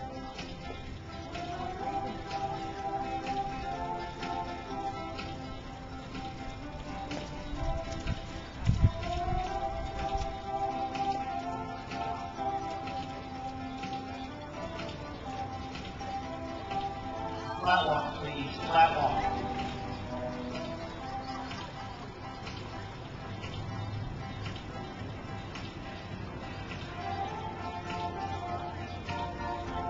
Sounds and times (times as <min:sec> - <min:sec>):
Music: 0:00.0 - 0:29.9
Speech: 0:17.6 - 0:19.4.